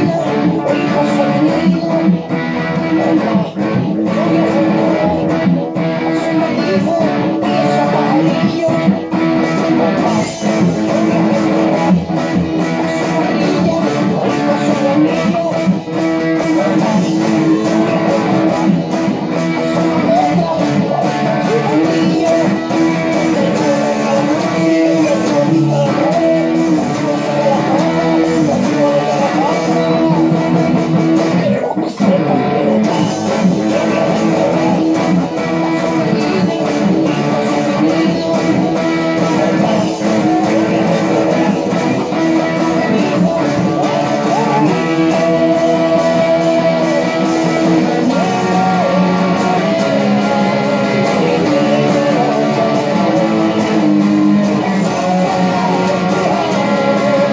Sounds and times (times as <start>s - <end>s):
Electric guitar: 0.0s - 57.3s.